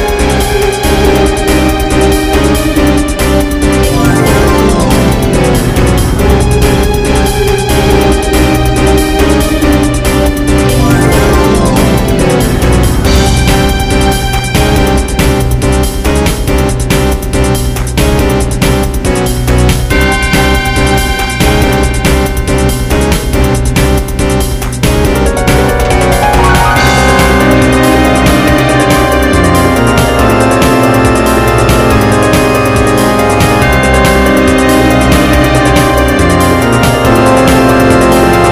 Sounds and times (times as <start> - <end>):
Music: 0.0 - 38.5.